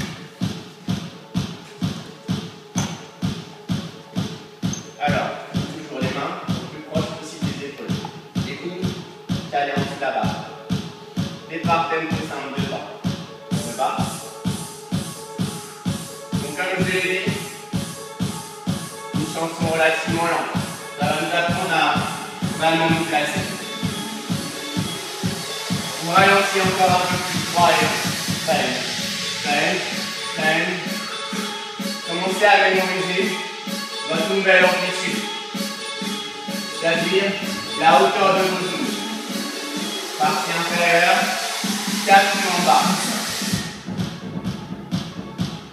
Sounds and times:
Music: 0:00.0 - 0:45.7
Speech: 0:05.0 - 0:08.9, 0:09.5 - 0:10.4, 0:11.5 - 0:12.9, 0:16.4 - 0:17.4, 0:19.2 - 0:23.5, 0:26.0 - 0:30.9, 0:32.1 - 0:33.4, 0:34.1 - 0:35.2, 0:36.8 - 0:38.9, 0:40.2 - 0:41.3, 0:42.1 - 0:43.0.

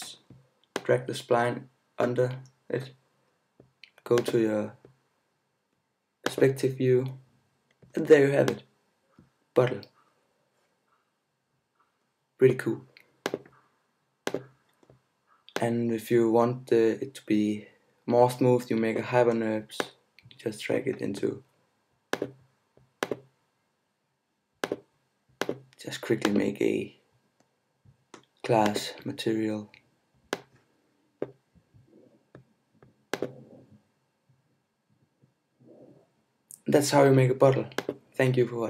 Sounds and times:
Speech: 0:00.0 - 0:00.2, 0:00.8 - 0:03.0, 0:04.1 - 0:04.8, 0:06.3 - 0:07.2, 0:08.0 - 0:08.6, 0:09.6 - 0:09.9, 0:12.4 - 0:12.9, 0:15.6 - 0:21.4, 0:25.8 - 0:27.0, 0:28.5 - 0:29.8, 0:36.5 - 0:38.7.

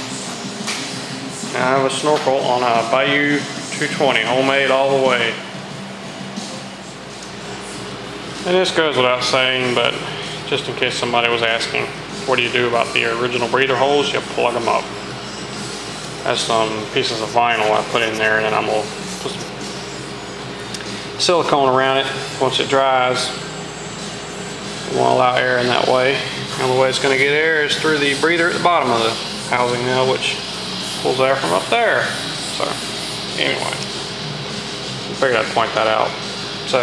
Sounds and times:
Music: 0:00.0 - 0:36.8
Speech: 0:01.5 - 0:05.4, 0:08.4 - 0:14.9, 0:16.2 - 0:19.6, 0:21.2 - 0:23.4, 0:24.9 - 0:32.8, 0:33.4 - 0:33.9, 0:35.2 - 0:36.8.

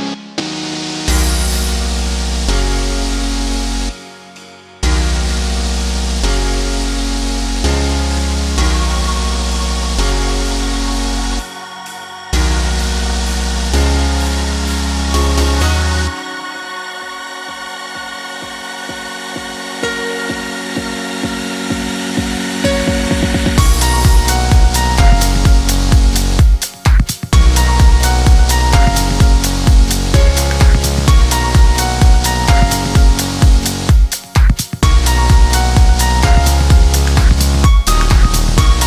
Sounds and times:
Music: 0:00.0 - 0:38.8.

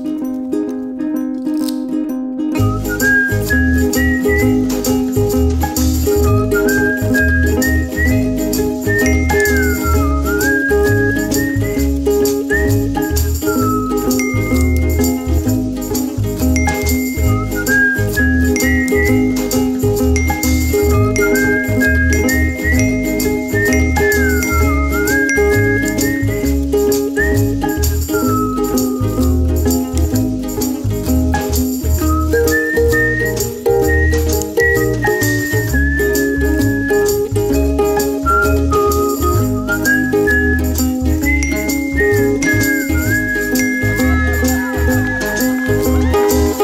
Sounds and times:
Music: 0:00.0 - 0:46.6.

